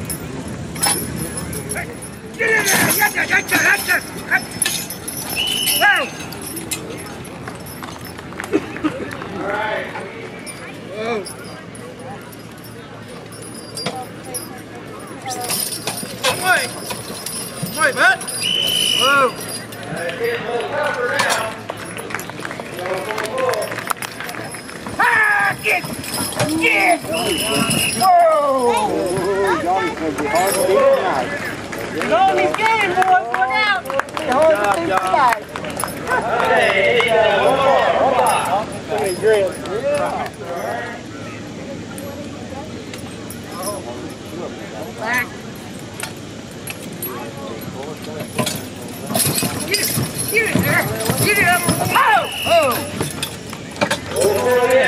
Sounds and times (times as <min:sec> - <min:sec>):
Clip-clop: 0:02.5 - 0:40.9, 0:46.7 - 0:54.8.